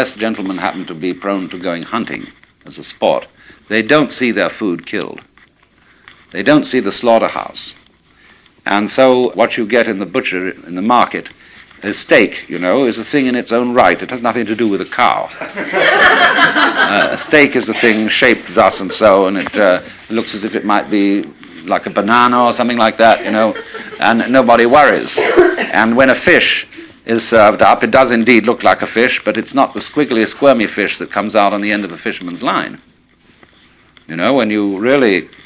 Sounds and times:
Speech: 0.0 - 5.3, 6.3 - 7.8, 8.6 - 15.4, 16.9 - 32.9, 34.1 - 35.4.

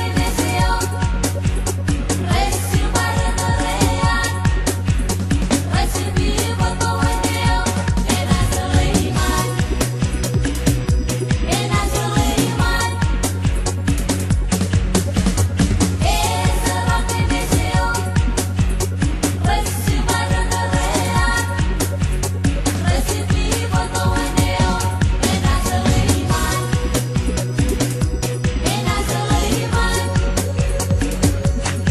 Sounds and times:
Music: 0.0 - 31.9.

